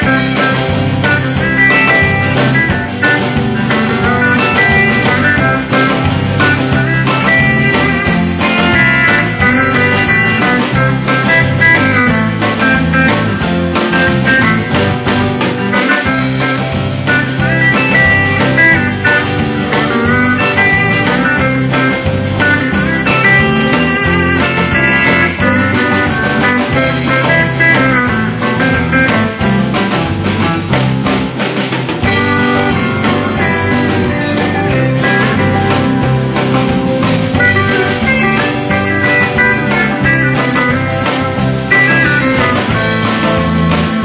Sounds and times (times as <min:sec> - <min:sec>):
Steel guitar, slide guitar: 0:00.0 - 0:44.0.